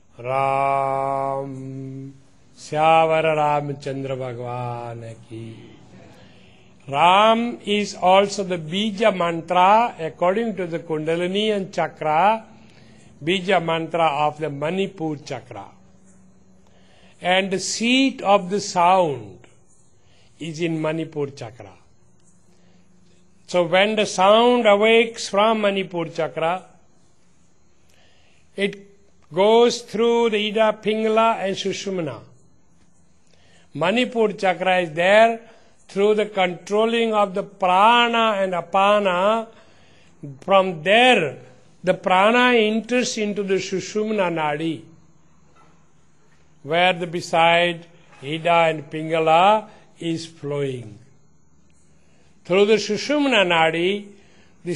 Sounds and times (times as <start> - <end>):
Speech: 0.2 - 6.2, 6.9 - 12.5, 13.2 - 15.8, 17.2 - 19.5, 20.4 - 21.9, 23.5 - 26.7, 28.6 - 32.3, 33.8 - 39.5, 40.2 - 44.9, 46.6 - 51.1, 52.5 - 54.7.